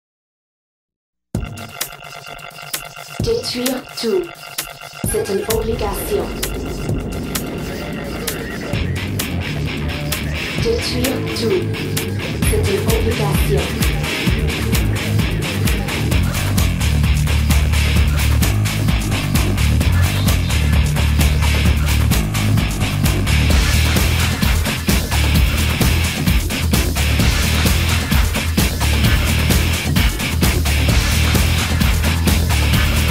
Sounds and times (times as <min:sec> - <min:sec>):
Music: 0:01.3 - 0:33.1
Speech: 0:03.2 - 0:04.3, 0:05.1 - 0:06.5, 0:10.6 - 0:11.8, 0:12.4 - 0:13.8.